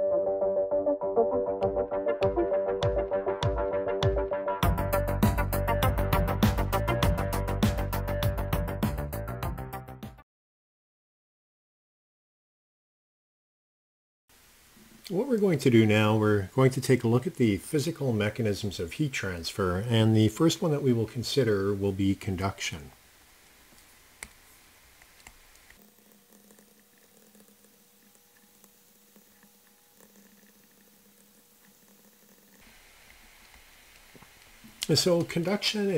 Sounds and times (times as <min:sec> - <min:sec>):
Speech: 0:15.1 - 0:23.0, 0:34.8 - 0:35.9.